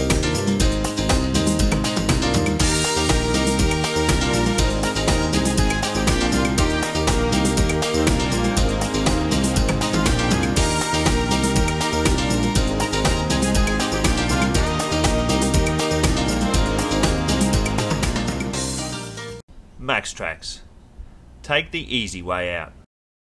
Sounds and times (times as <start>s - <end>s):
Music: 0.0s - 19.4s
Speech: 19.8s - 20.7s, 21.4s - 22.9s.